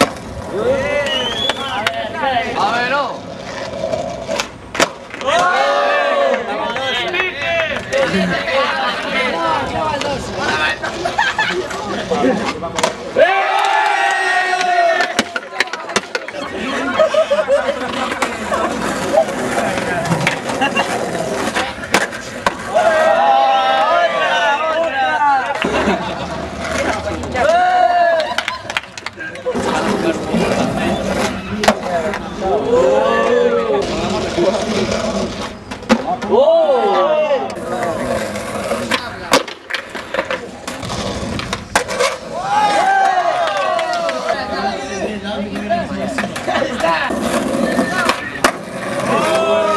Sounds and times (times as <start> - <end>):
Crowd: 0.0 - 49.7.